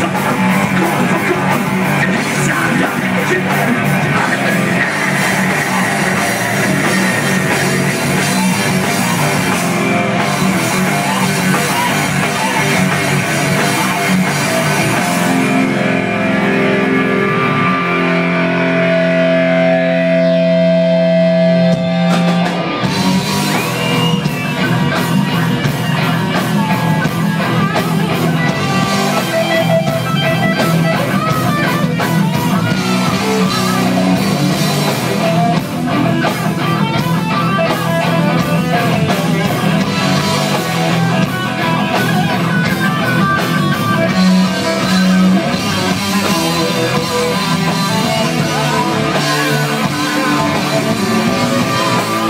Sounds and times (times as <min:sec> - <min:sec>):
Heavy metal: 0:00.0 - 0:52.3.